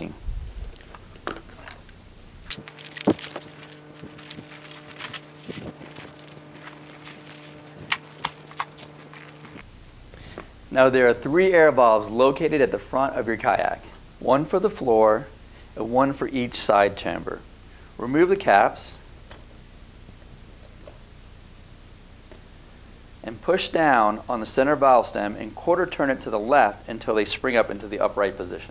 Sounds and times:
Speech: 0:00.0 - 0:00.2, 0:10.7 - 0:17.4, 0:18.0 - 0:19.0, 0:23.2 - 0:28.7.

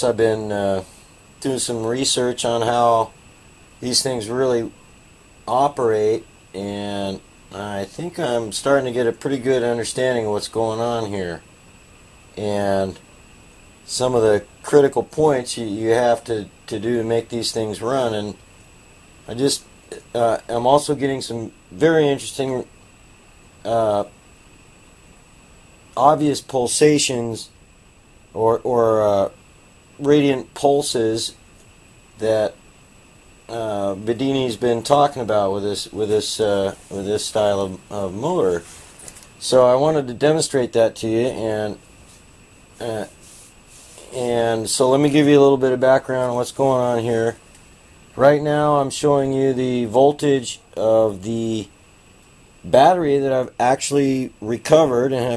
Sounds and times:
Speech: 0:00.0 - 0:03.2, 0:03.8 - 0:04.8, 0:05.5 - 0:11.4, 0:12.4 - 0:13.0, 0:13.9 - 0:18.4, 0:19.3 - 0:22.7, 0:23.6 - 0:24.1, 0:26.0 - 0:27.6, 0:28.3 - 0:29.4, 0:30.0 - 0:31.4, 0:32.2 - 0:32.6, 0:33.5 - 0:38.7, 0:39.4 - 0:41.8, 0:42.8 - 0:43.2, 0:44.0 - 0:47.4, 0:48.2 - 0:51.7, 0:52.6 - 0:55.3.

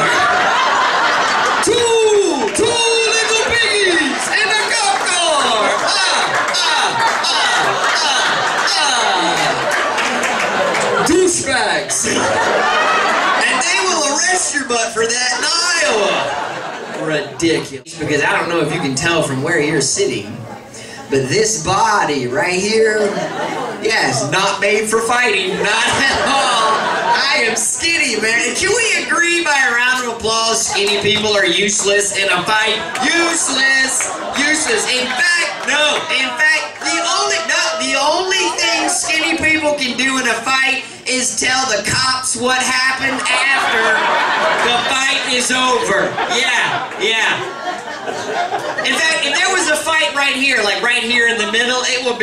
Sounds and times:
Snicker: 0:00.0 - 0:02.6, 0:05.4 - 0:11.2, 0:11.9 - 0:14.1, 0:43.6 - 0:49.4
Speech: 0:01.6 - 0:09.7, 0:10.9 - 0:12.4, 0:13.3 - 0:47.6, 0:48.8 - 0:52.2.

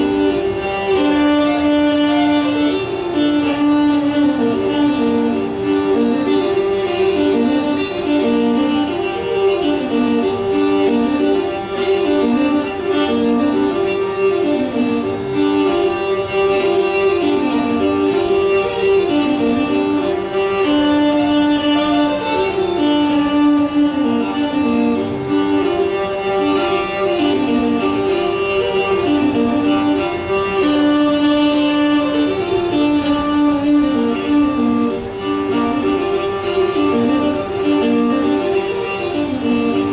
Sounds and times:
Violin, fiddle: 0:00.0 - 0:39.9.

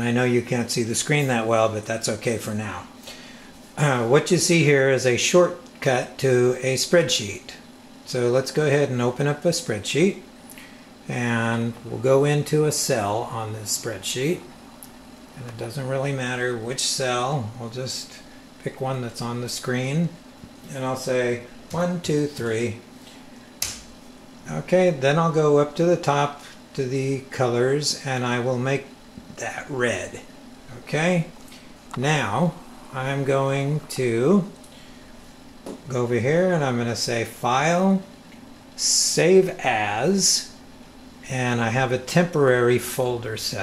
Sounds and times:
Speech: 0:00.0 - 0:02.9, 0:03.8 - 0:10.3, 0:11.1 - 0:14.5, 0:15.4 - 0:22.9, 0:24.4 - 0:34.6, 0:35.8 - 0:38.2, 0:38.8 - 0:40.6, 0:41.2 - 0:43.6.

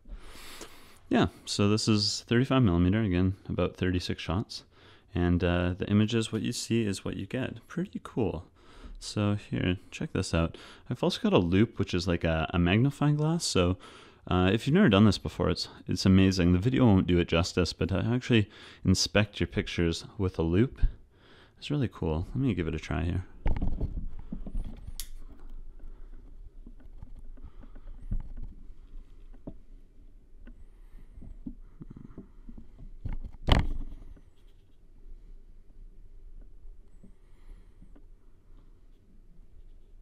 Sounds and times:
Silence: 0:23.3 - 0:40.0.

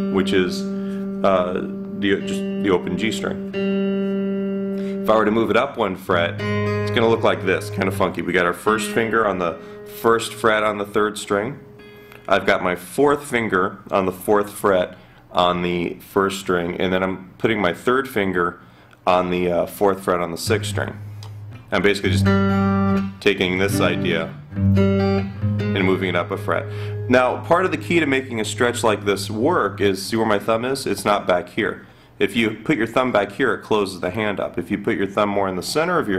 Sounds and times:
Strum: 0:00.0 - 0:12.2, 0:20.4 - 0:29.9.

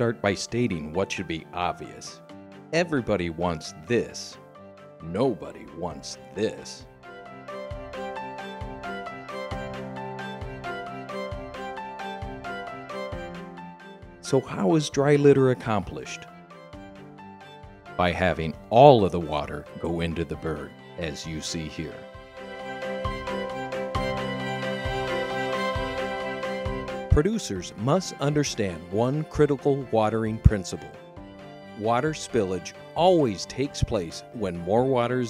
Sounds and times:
Speech: 0:00.0 - 0:02.2, 0:02.8 - 0:04.4, 0:05.0 - 0:06.9, 0:14.2 - 0:16.3, 0:18.0 - 0:22.0, 0:27.1 - 0:31.0, 0:31.8 - 0:35.2
Music: 0:00.0 - 0:35.2.

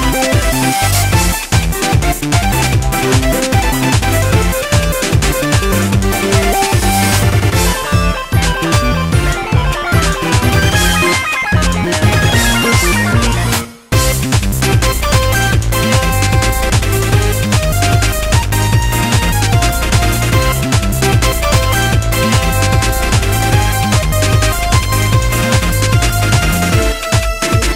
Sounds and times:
Music: 0:00.0 - 0:27.7.

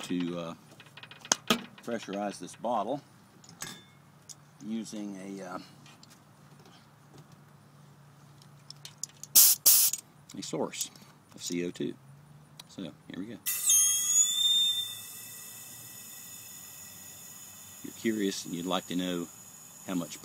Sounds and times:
Speech: 0:00.0 - 0:00.6, 0:01.8 - 0:03.0, 0:04.6 - 0:05.7, 0:10.3 - 0:12.0, 0:12.7 - 0:13.5, 0:17.9 - 0:19.3, 0:19.9 - 0:20.2.

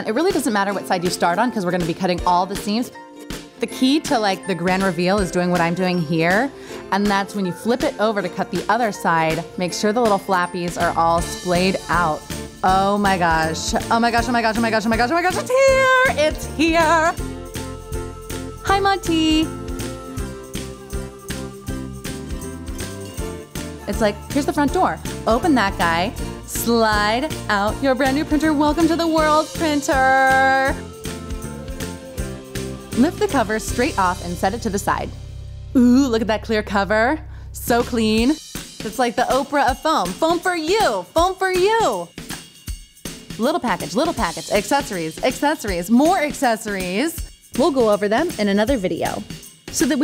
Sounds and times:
Music: 0:00.0 - 0:50.0
Speech: 0:03.6 - 0:17.2, 0:18.7 - 0:19.5, 0:35.8 - 0:42.1, 0:43.4 - 0:50.0.

